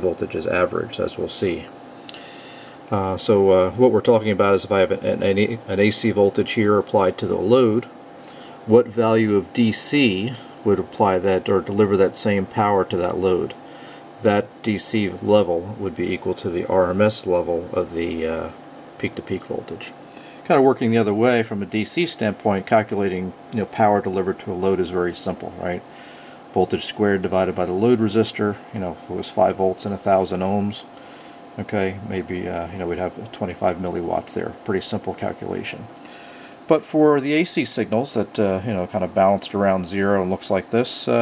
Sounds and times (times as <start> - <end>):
Speech: 0.0 - 1.7, 2.9 - 7.9, 8.7 - 13.6, 14.2 - 25.9, 26.5 - 30.9, 31.6 - 36.0, 36.7 - 41.2.